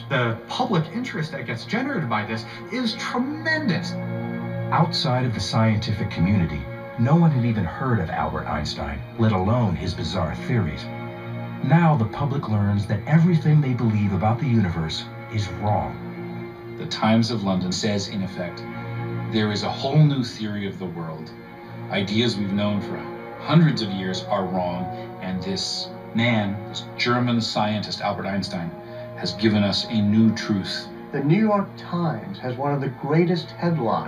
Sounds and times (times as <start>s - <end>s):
Speech: 0.0s - 4.0s, 4.7s - 10.9s, 11.6s - 16.0s, 16.8s - 18.7s, 19.3s - 34.0s
Music: 0.0s - 34.0s.